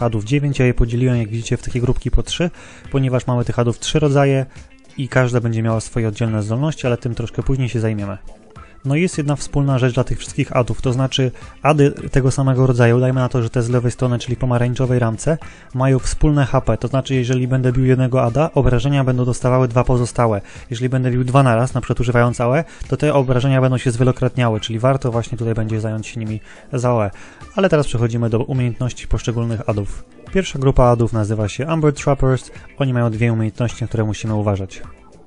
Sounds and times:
Speech: 0.0 - 35.0
Music: 0.0 - 35.2.

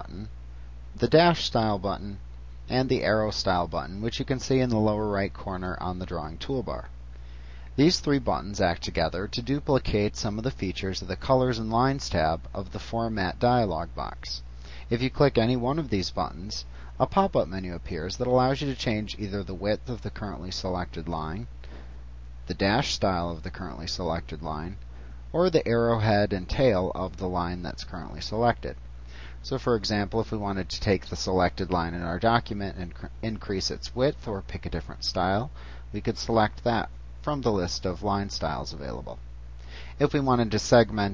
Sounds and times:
Speech: 0.0 - 0.4, 1.0 - 6.9, 7.8 - 21.5, 22.5 - 28.8, 29.4 - 39.2, 40.0 - 41.1.

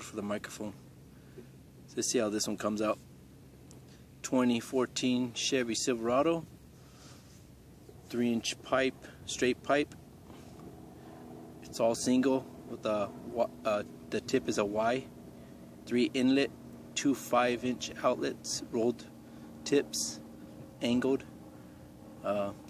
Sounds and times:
Speech: 0.0 - 0.8, 1.9 - 3.0, 4.2 - 6.5, 8.1 - 10.0, 11.6 - 15.1, 15.9 - 20.2, 20.8 - 21.3, 22.2 - 22.6.

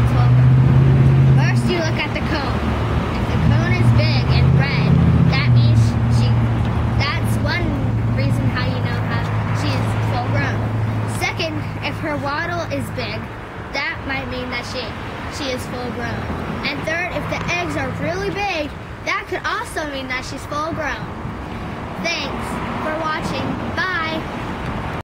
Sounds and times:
Speech: 0.0 - 0.4, 1.4 - 2.6, 3.2 - 6.4, 7.0 - 21.1, 22.0 - 24.3.

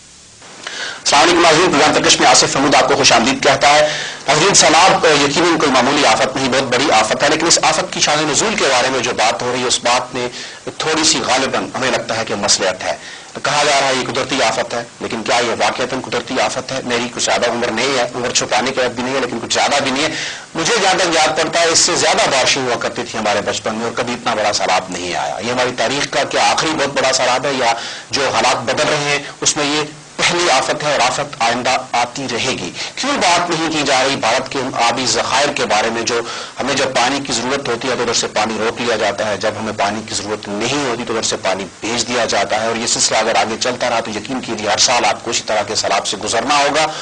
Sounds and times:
Speech: 1.0 - 47.0.

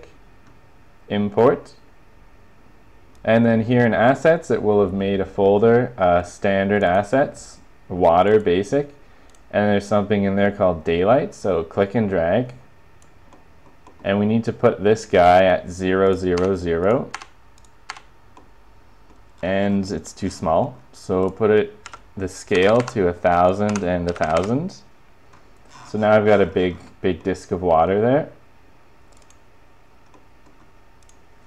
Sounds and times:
Speech: 1.1 - 1.9, 3.2 - 12.6, 14.0 - 17.2, 19.4 - 24.9, 25.9 - 28.4.

